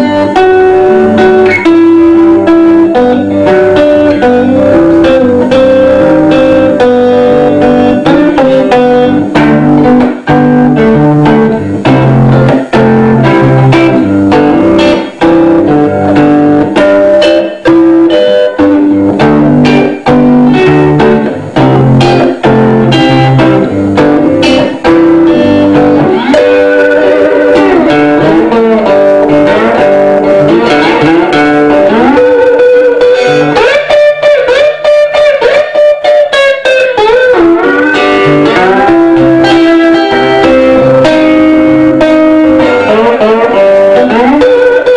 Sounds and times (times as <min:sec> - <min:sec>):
Electric guitar: 0:00.0 - 0:44.9.